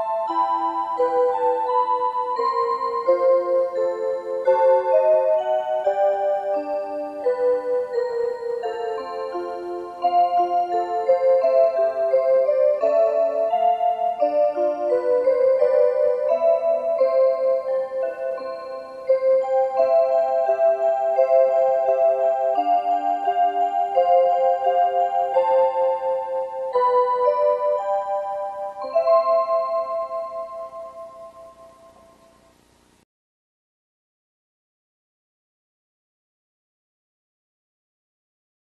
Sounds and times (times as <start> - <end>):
Music: 0.0 - 32.7.